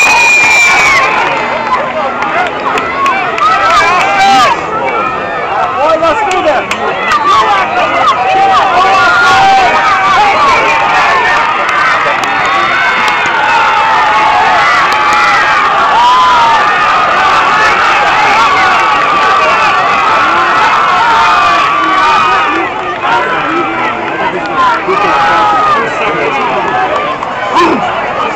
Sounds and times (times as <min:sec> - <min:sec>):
Male speech, man speaking: 0:05.7 - 0:08.1, 0:23.2 - 0:26.7.